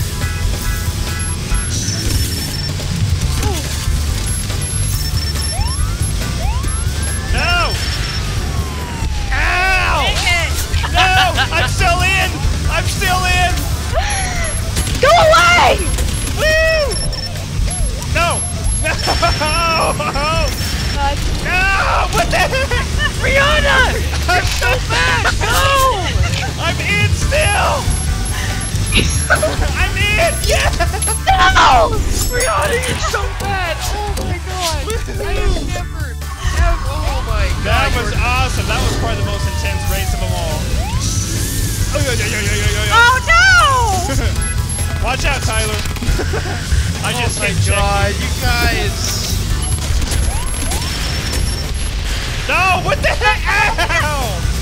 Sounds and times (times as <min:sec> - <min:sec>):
Music: 0:00.0 - 0:54.6.